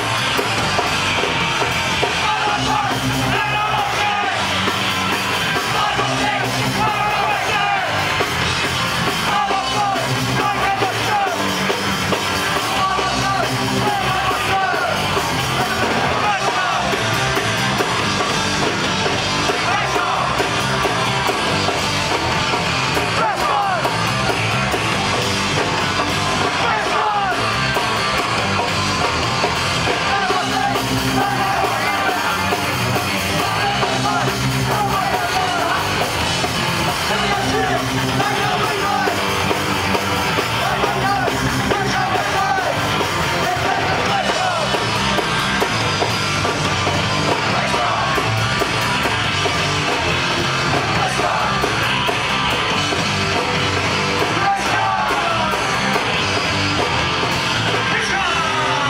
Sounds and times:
Music: 0.0 - 58.9.

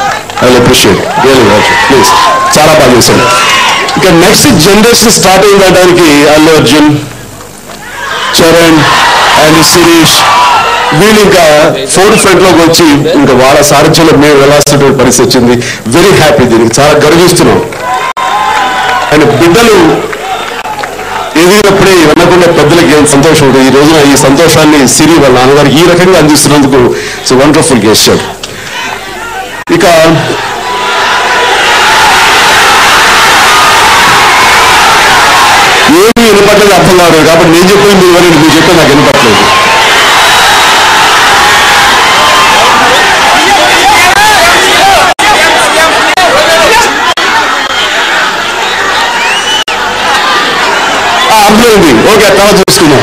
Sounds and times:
Narration, monologue: 0.2 - 17.8, 19.1 - 20.1, 21.3 - 28.7, 35.9 - 39.5, 51.3 - 53.0
Male speech, man speaking: 0.4 - 3.3, 4.0 - 7.1, 8.4 - 10.3, 10.9 - 17.7, 19.1 - 20.0, 21.4 - 28.3, 29.7 - 30.4, 35.9 - 39.5, 51.3 - 53.0.

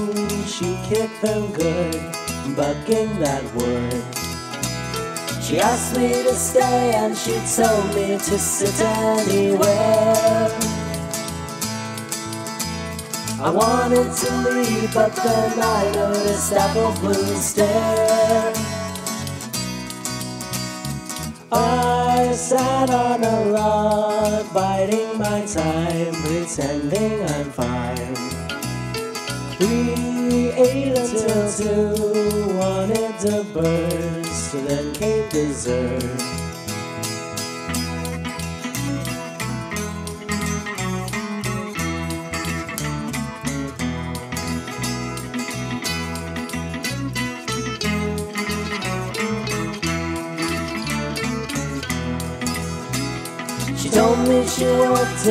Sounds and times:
Music: 0.0 - 55.3.

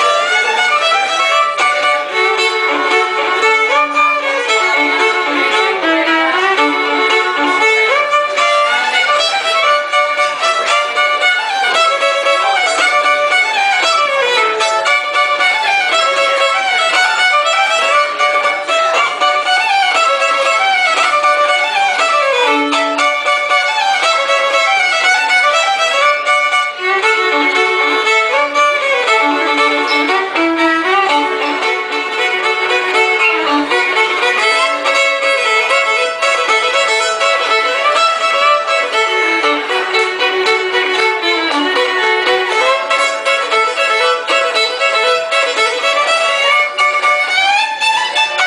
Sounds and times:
Violin, fiddle: 0.0 - 48.4.

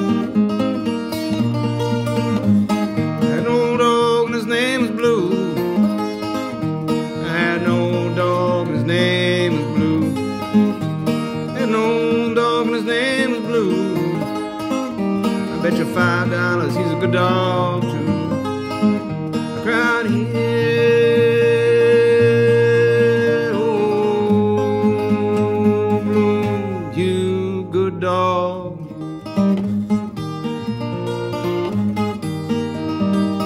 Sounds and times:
Music: 0.0 - 33.4.

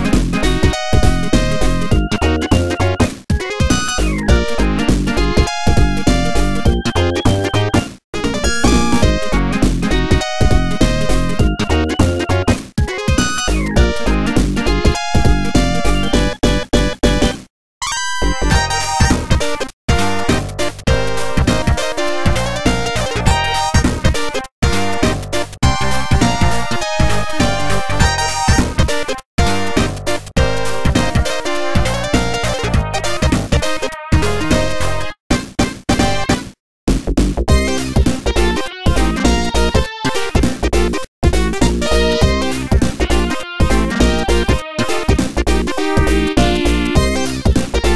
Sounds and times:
Theme music: 3.8 - 12.4, 41.3 - 47.9.

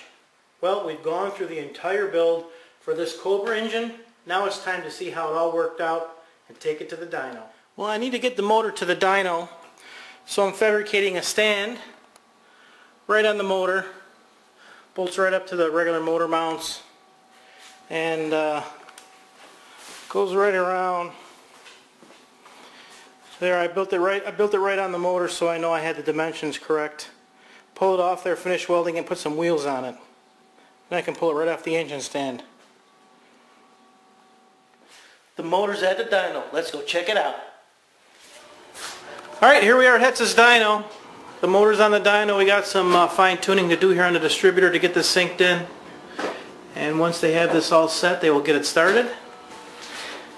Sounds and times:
Speech: 0.6 - 9.6, 10.3 - 12.0, 13.1 - 14.1, 15.0 - 16.9, 17.9 - 18.8, 20.1 - 21.2, 23.4 - 27.2, 27.8 - 30.1, 30.9 - 32.5, 35.4 - 37.6, 39.3 - 45.7, 46.7 - 49.3.

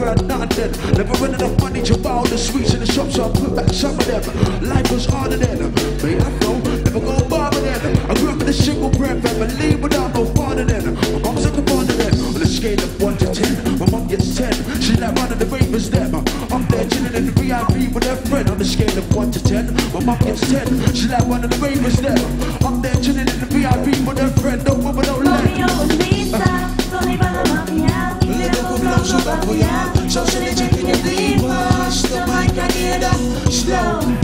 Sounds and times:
Funk: 0.0 - 34.2
Singing: 0.0 - 34.2.

